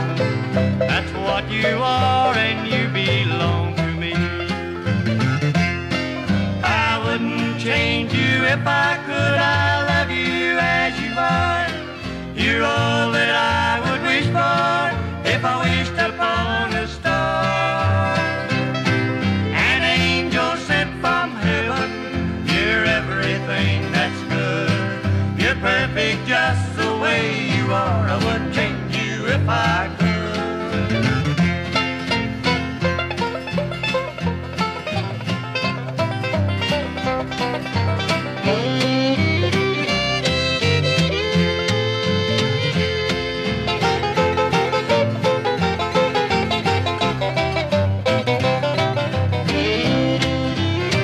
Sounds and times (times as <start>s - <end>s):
Country: 0.0s - 51.0s.